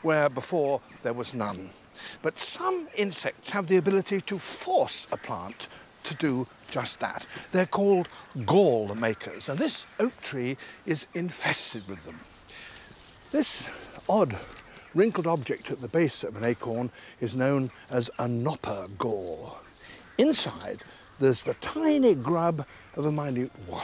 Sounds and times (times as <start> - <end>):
Speech: 0.0 - 12.3, 13.3 - 23.8.